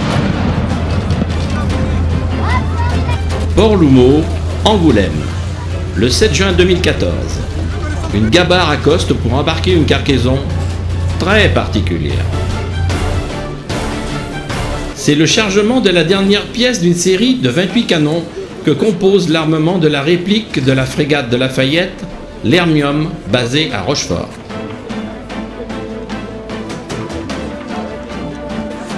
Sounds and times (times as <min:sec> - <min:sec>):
Music: 0:00.0 - 0:28.9
Speech: 0:11.2 - 0:12.3, 0:15.0 - 0:24.3.